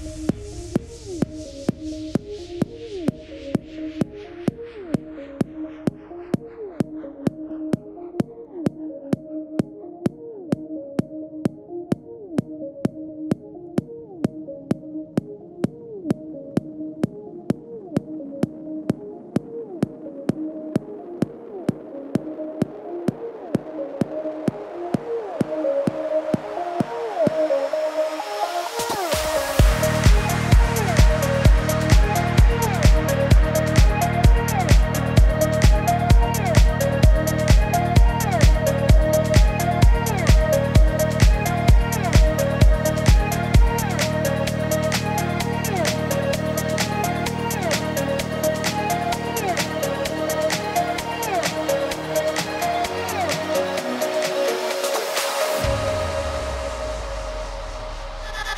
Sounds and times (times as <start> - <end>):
Music: 0.0 - 58.5.